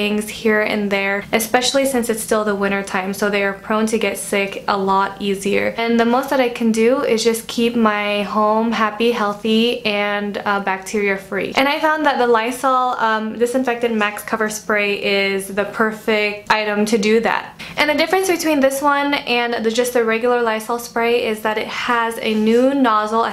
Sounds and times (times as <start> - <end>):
Speech: 0.0 - 23.3.